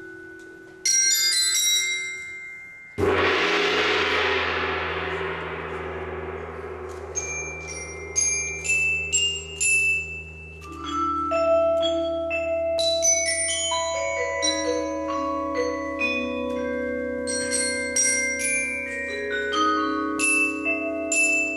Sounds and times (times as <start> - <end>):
Marimba, xylophone: 0.0 - 3.3, 6.8 - 21.5
Vibraphone: 0.0 - 3.5, 6.5 - 21.5.